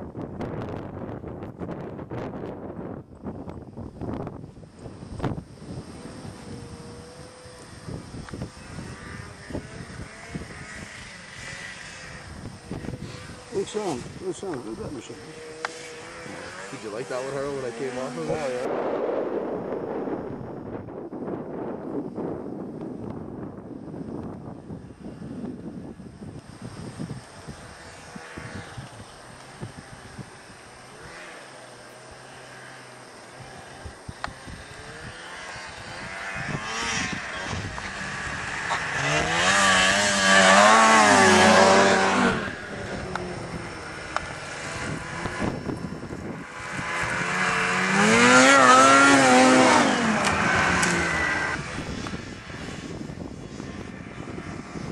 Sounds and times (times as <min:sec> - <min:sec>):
Outside, rural or natural: 0:00.0 - 0:54.9
Vehicle: 0:00.0 - 0:54.9
Speech: 0:13.5 - 0:15.4, 0:16.6 - 0:18.7.